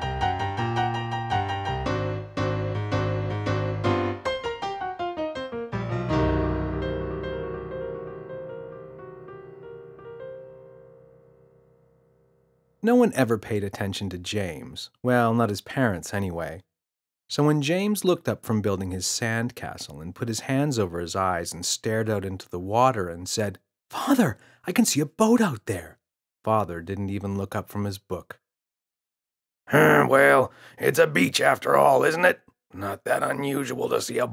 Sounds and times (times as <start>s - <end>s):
Speech: 12.8s - 16.6s, 17.3s - 28.4s, 29.7s - 34.3s.